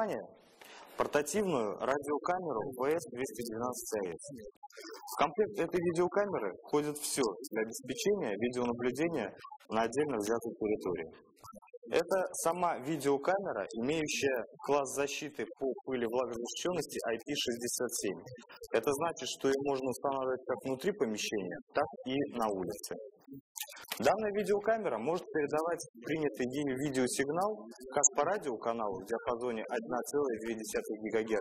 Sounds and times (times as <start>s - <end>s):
Speech: 0.0s - 0.4s, 1.0s - 11.2s, 11.9s - 31.4s.